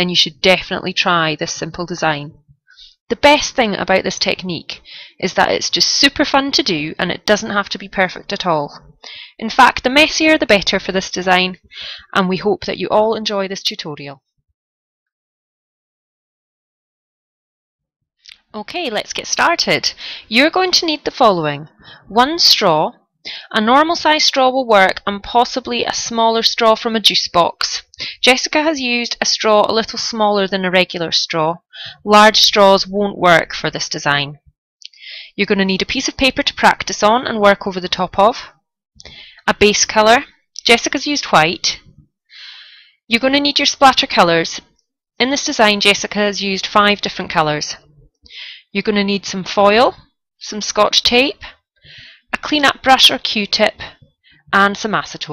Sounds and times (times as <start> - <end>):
Speech: 0.0 - 2.4, 3.1 - 14.2, 18.3 - 34.4, 35.4 - 38.5, 39.4 - 41.9, 43.1 - 44.6, 45.2 - 47.9, 48.7 - 51.6, 52.3 - 55.3.